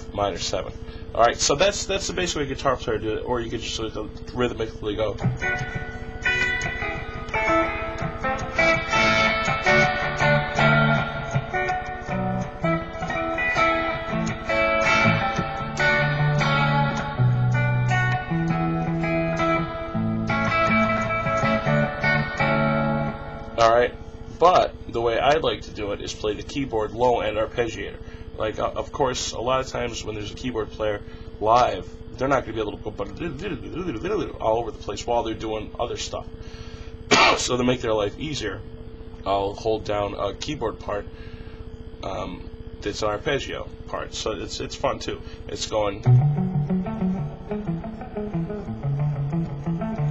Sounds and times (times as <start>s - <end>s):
Guitar: 0.0s - 50.1s.